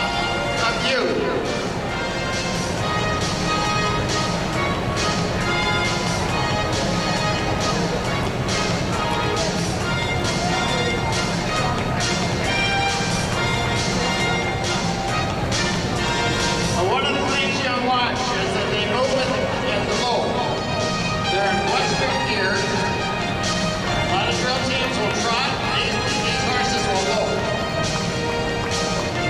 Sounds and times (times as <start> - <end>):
Music: 0.0 - 29.3
Speech: 0.6 - 1.5, 16.7 - 20.6, 21.3 - 23.0, 24.0 - 27.5.